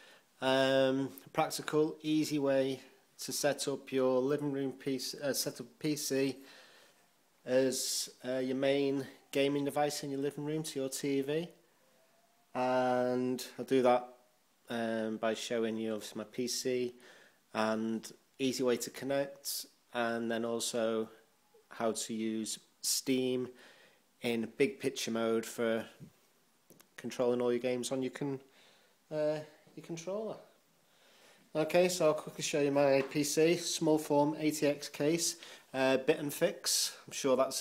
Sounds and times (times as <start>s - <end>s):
Speech: 0.4s - 6.4s, 7.4s - 11.6s, 12.5s - 23.6s, 24.2s - 26.1s, 27.0s - 28.5s, 29.1s - 30.6s, 31.5s - 37.6s.